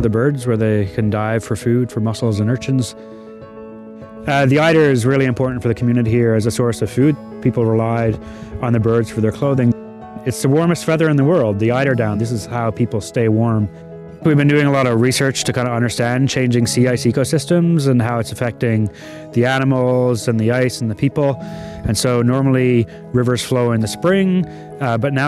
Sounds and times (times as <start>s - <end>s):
Speech: 0.0s - 3.0s, 4.3s - 25.2s
Music: 0.0s - 25.2s.